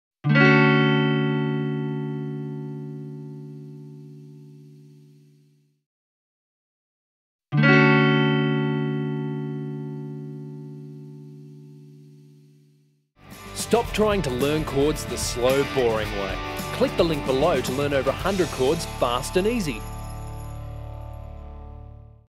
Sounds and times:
Guitar: 0.2s - 5.4s, 7.5s - 12.0s, 13.2s - 22.2s
Speech: 13.6s - 19.8s.

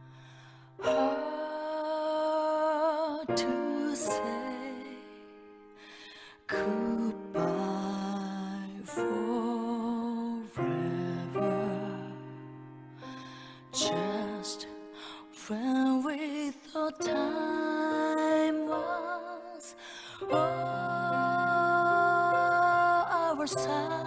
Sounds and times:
Music: 0.0s - 24.0s.

